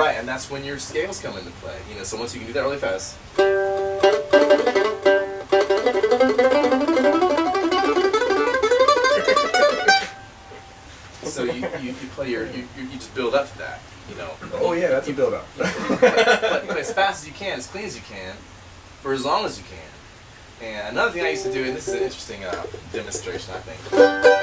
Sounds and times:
Speech: 0:00.0 - 0:03.2, 0:11.2 - 0:15.8, 0:16.6 - 0:18.4, 0:19.0 - 0:20.0, 0:20.6 - 0:23.9
Music: 0:03.4 - 0:10.8, 0:23.9 - 0:24.4.

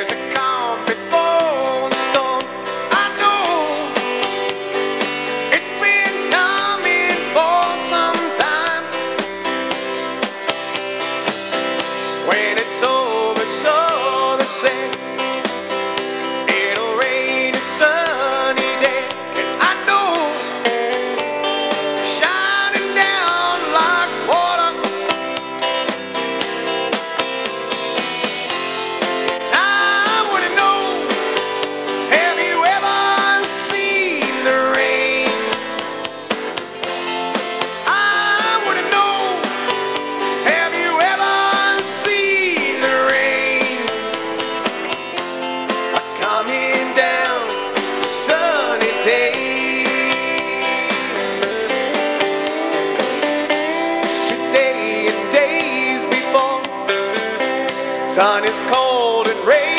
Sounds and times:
Music: 0:00.0 - 0:59.7.

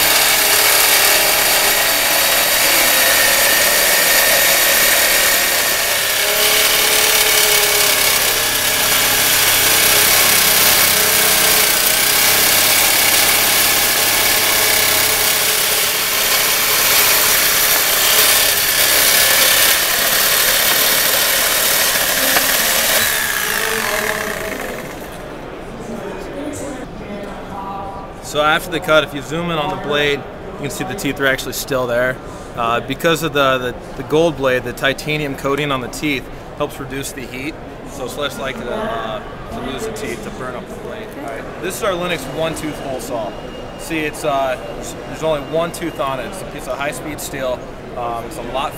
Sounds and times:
Drill: 0:00.0 - 0:25.2.

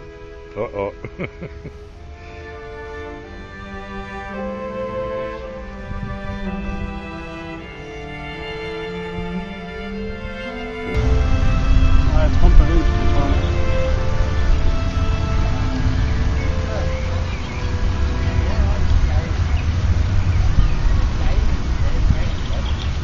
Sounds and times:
Music: 0:00.0 - 0:23.0
Speech: 0:00.5 - 0:01.1, 0:12.1 - 0:13.5, 0:18.4 - 0:19.7, 0:20.8 - 0:22.9.

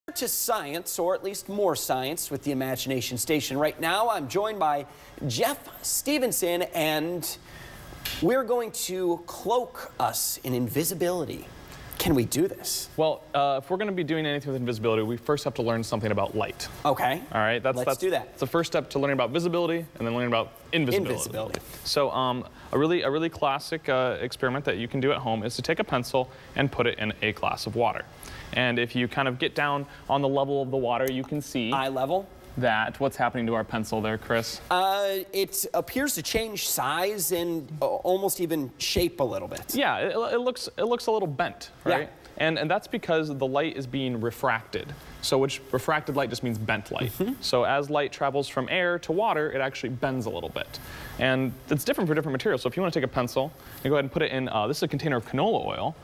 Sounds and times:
Speech: 0:08.2 - 0:28.0, 0:28.6 - 0:56.0.

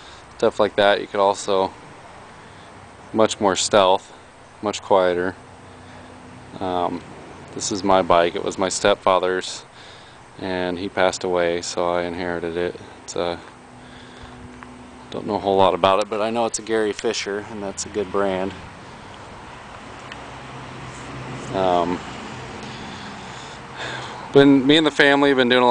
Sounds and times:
Vehicle: 0:00.0 - 0:25.7
Speech: 0:00.4 - 0:01.8, 0:03.1 - 0:05.4, 0:06.6 - 0:07.0, 0:07.6 - 0:09.7, 0:10.4 - 0:13.5, 0:15.1 - 0:18.6, 0:21.5 - 0:22.0, 0:24.3 - 0:25.7.

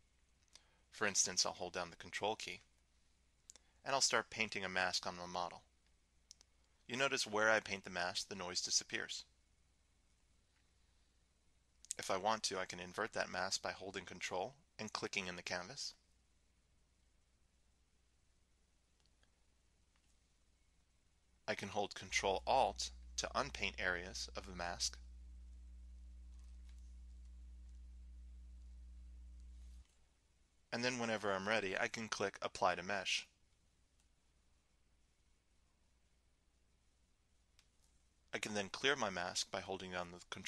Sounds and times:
Speech: 0:01.0 - 0:02.7, 0:03.8 - 0:05.7, 0:06.9 - 0:09.3, 0:11.9 - 0:16.0, 0:21.5 - 0:25.0, 0:30.7 - 0:33.4, 0:38.4 - 0:40.4.

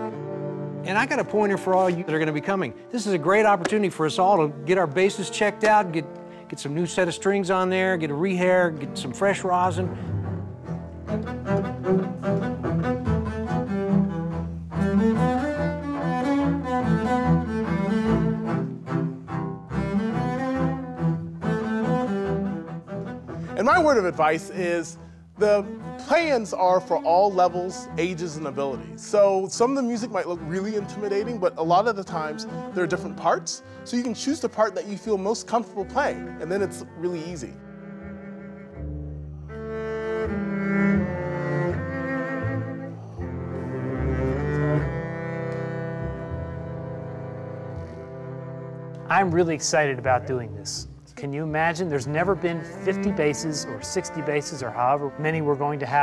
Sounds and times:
Music: 0:00.0 - 0:56.0
Speech: 0:00.9 - 0:09.9, 0:23.6 - 0:37.6, 0:49.1 - 0:56.0.

